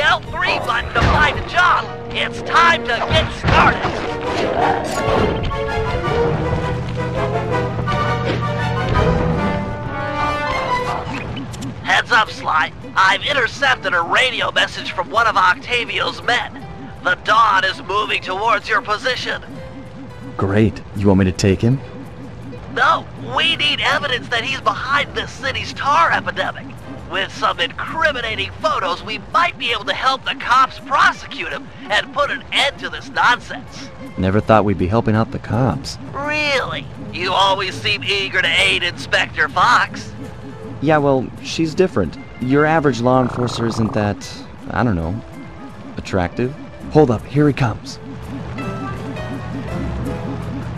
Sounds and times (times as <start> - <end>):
Music: 0.0 - 50.7
Speech: 22.8 - 40.0, 40.8 - 45.2, 46.0 - 48.0.